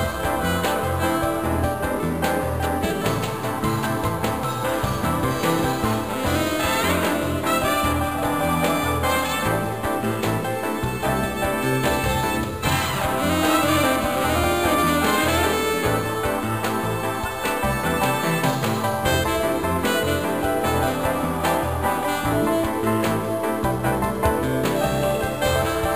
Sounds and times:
Soundtrack music: 0:00.0 - 0:25.9.

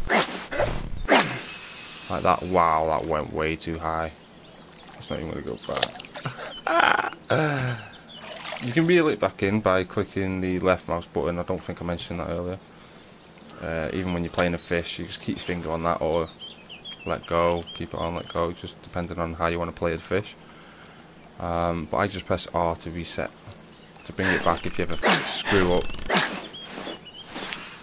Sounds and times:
Outside, rural or natural: 0:00.0 - 0:27.8
Speech: 0:02.1 - 0:04.2, 0:05.0 - 0:05.9, 0:08.6 - 0:12.6, 0:13.5 - 0:16.3, 0:17.1 - 0:20.4, 0:21.4 - 0:23.4, 0:24.0 - 0:25.9.

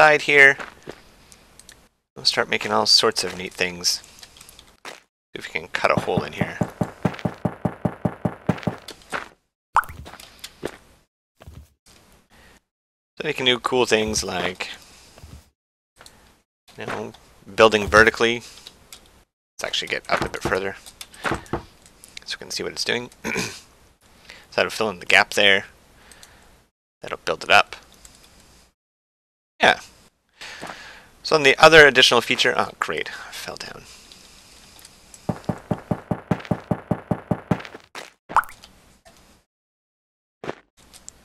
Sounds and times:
Speech: 0:00.0 - 0:00.6, 0:02.2 - 0:04.0, 0:05.4 - 0:06.6, 0:13.2 - 0:14.8, 0:16.8 - 0:18.5, 0:19.6 - 0:20.8, 0:22.2 - 0:23.1, 0:24.5 - 0:25.7, 0:27.0 - 0:27.8, 0:29.6 - 0:29.9, 0:31.2 - 0:33.9.

